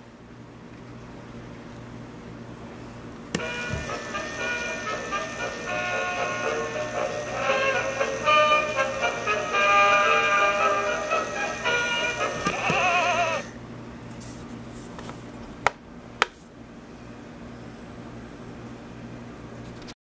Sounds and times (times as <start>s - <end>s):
Music: 3.4s - 13.5s.